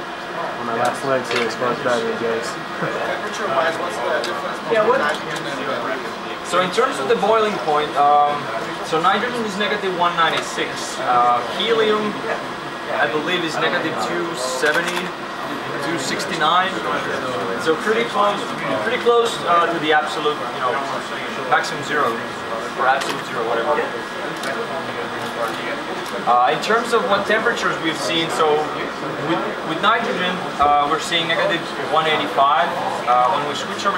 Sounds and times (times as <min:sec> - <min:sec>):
Speech: 0:00.3 - 0:33.9.